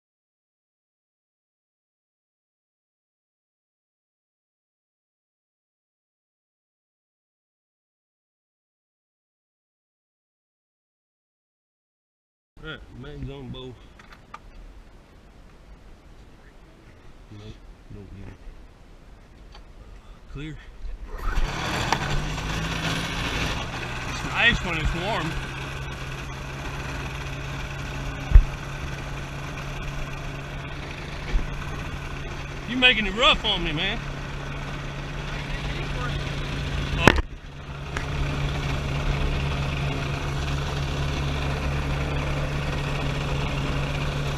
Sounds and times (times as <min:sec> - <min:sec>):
Speech: 0:12.6 - 0:13.8, 0:16.4 - 0:18.4, 0:20.3 - 0:21.0, 0:24.2 - 0:25.4, 0:32.7 - 0:34.0, 0:35.4 - 0:36.2.